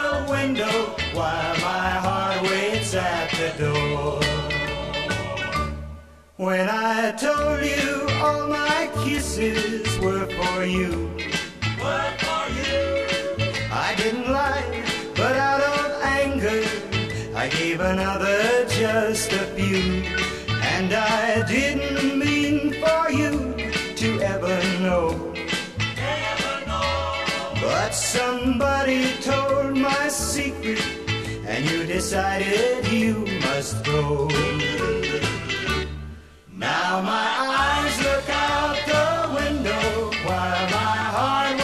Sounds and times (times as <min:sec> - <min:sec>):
Music: 0:00.0 - 0:41.6.